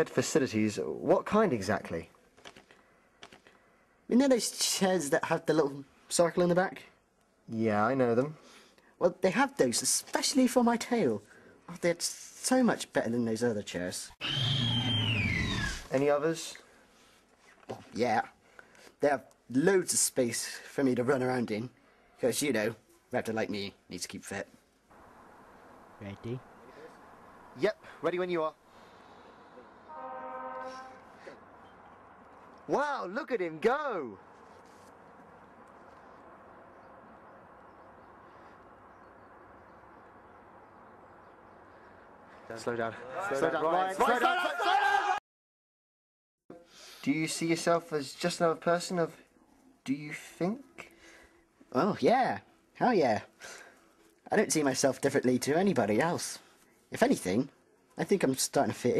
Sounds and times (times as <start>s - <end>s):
Speech: 0.0s - 2.1s, 4.1s - 6.9s, 9.0s - 14.2s, 15.9s - 16.6s, 17.7s - 18.4s, 19.0s - 24.5s, 26.0s - 26.4s, 27.6s - 28.6s, 32.7s - 34.2s, 47.0s - 49.2s, 49.8s - 50.7s, 51.7s - 53.3s, 54.3s - 58.9s.